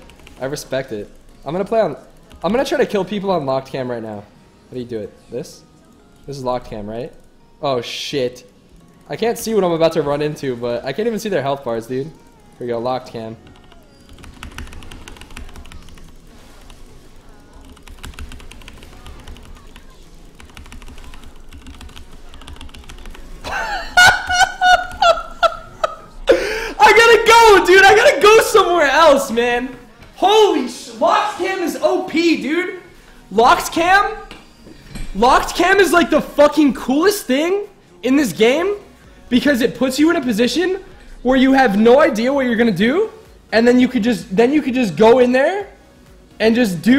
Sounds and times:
Speech: 0:26.8 - 0:34.3, 0:35.2 - 0:45.8, 0:46.4 - 0:46.9.

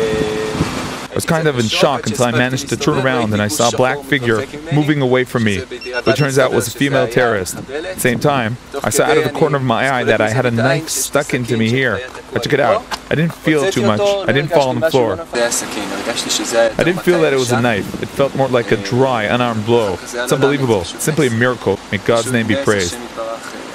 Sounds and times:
Speech: 0:00.0 - 0:23.7.

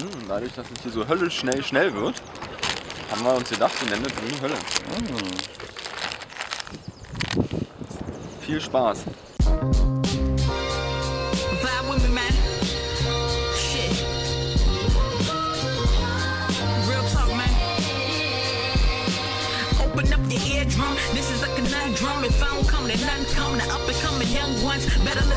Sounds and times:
Outside, rural or natural: 0:00.0 - 0:25.3
Speech: 0:03.1 - 0:05.4, 0:08.4 - 0:09.1
Music: 0:09.4 - 0:25.3.

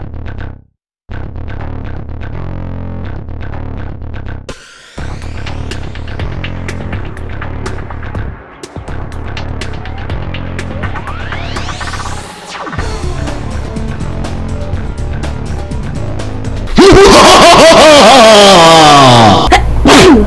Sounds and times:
Music: 0:00.1 - 0:20.2.

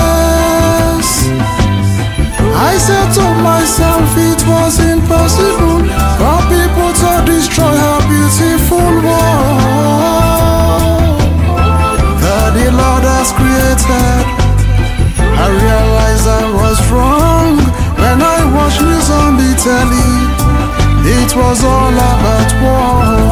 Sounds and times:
Soul music: 0:00.0 - 0:23.3.

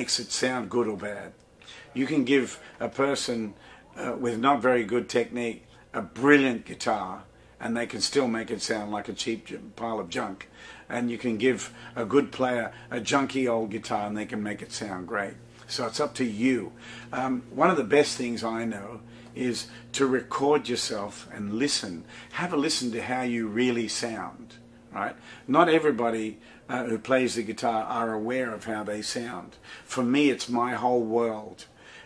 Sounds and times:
Speech: 0:00.0 - 0:31.7.

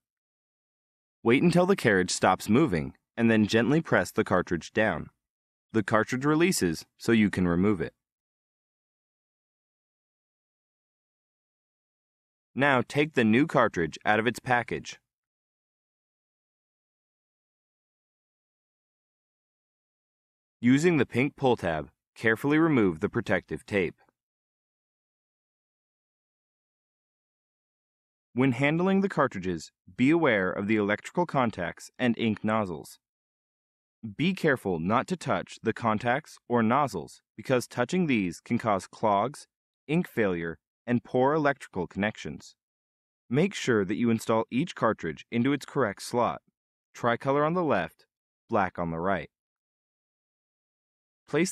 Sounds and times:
Speech: 0:01.3 - 0:05.2, 0:05.8 - 0:08.0, 0:12.6 - 0:15.1, 0:20.6 - 0:24.1, 0:28.4 - 0:33.0, 0:34.1 - 0:42.6, 0:43.3 - 0:49.4, 0:51.3 - 0:51.5.

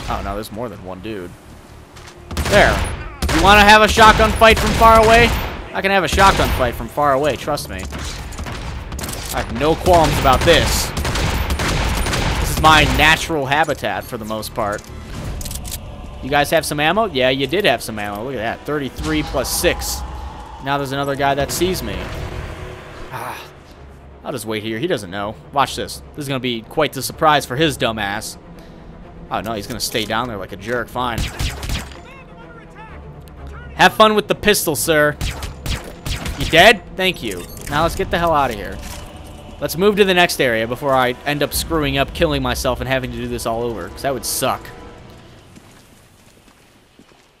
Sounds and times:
Gunshot, gunfire: 0:02.3 - 0:03.6, 0:07.9 - 0:13.0, 0:31.2 - 0:32.0, 0:35.2 - 0:36.6.

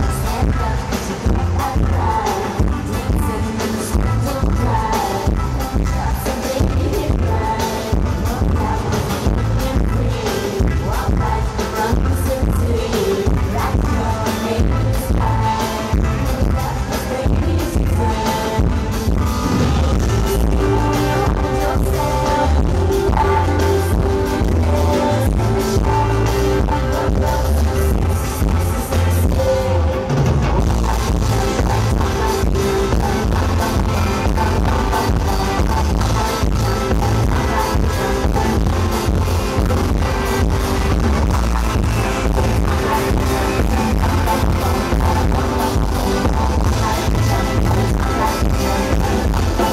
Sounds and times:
Music: 0:00.0 - 0:49.7.

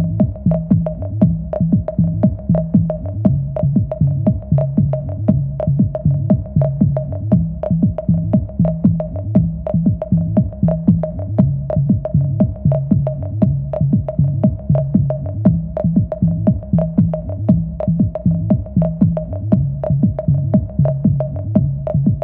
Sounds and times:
Drum machine: 0:00.0 - 0:22.2.

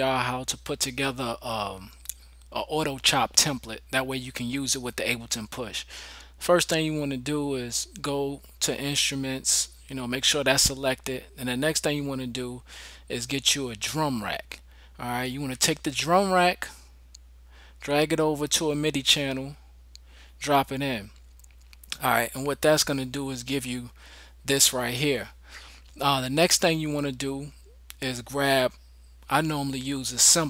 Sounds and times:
Speech: 0:00.0 - 0:16.8, 0:17.8 - 0:19.6, 0:20.4 - 0:21.2, 0:21.9 - 0:25.4, 0:26.0 - 0:30.5.

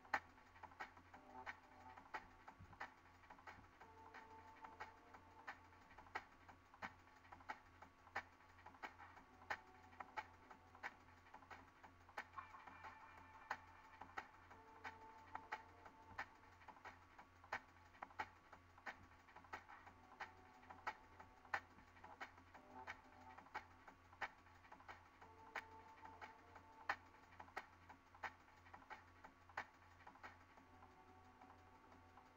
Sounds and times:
Music: 0:00.0 - 0:32.3.

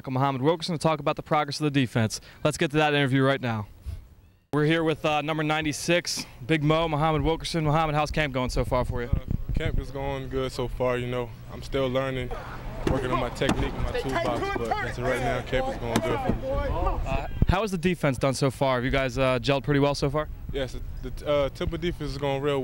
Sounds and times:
Speech: 0:04.6 - 0:22.6.

